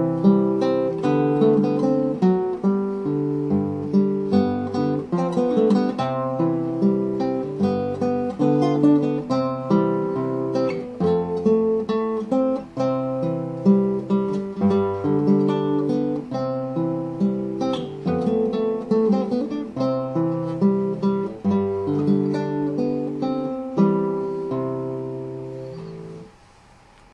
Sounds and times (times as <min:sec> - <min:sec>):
Acoustic guitar: 0:00.0 - 0:27.1
Strum: 0:00.0 - 0:27.1.